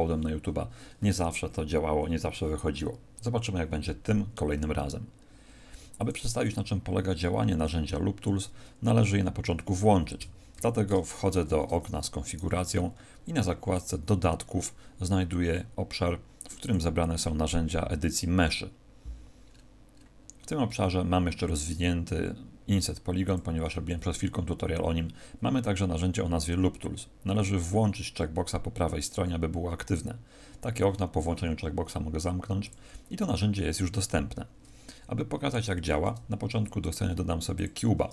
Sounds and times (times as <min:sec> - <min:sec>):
Speech: 0:00.0 - 0:05.1, 0:06.0 - 0:18.8, 0:20.4 - 0:34.5, 0:35.1 - 0:38.1.